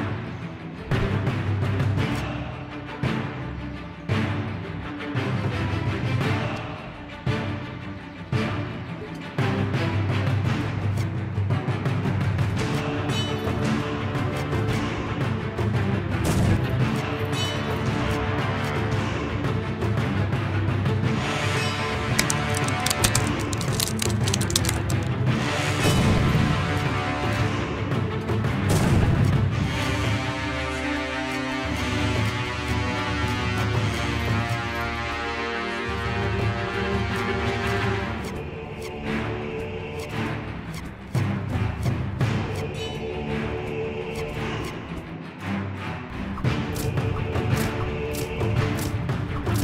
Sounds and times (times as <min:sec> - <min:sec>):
Music: 0:00.0 - 0:49.6.